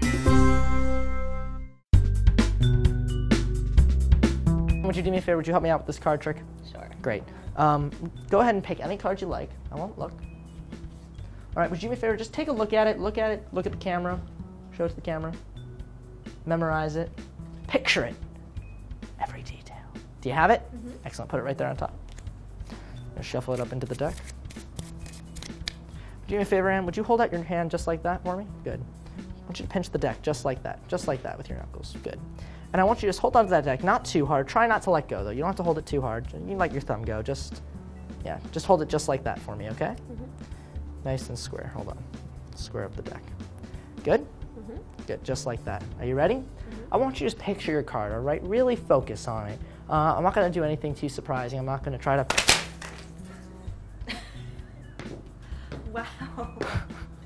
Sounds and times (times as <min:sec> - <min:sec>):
Music: 0:00.0 - 0:57.2
Speech: 0:04.8 - 0:10.2, 0:11.6 - 0:14.2, 0:17.7 - 0:18.2, 0:26.3 - 0:28.8, 0:29.5 - 0:37.6, 0:38.2 - 0:40.3, 0:41.0 - 0:42.0, 0:42.6 - 0:43.3, 0:44.0 - 0:52.3.